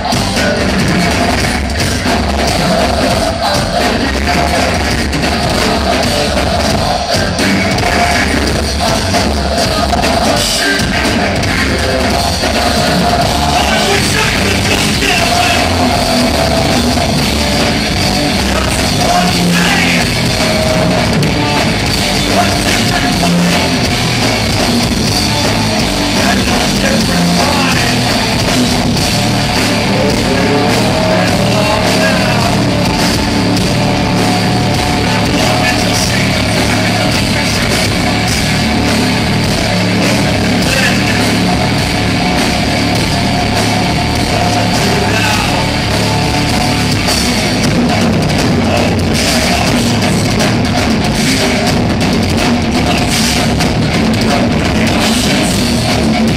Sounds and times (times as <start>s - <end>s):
Pop music: 0.0s - 47.8s.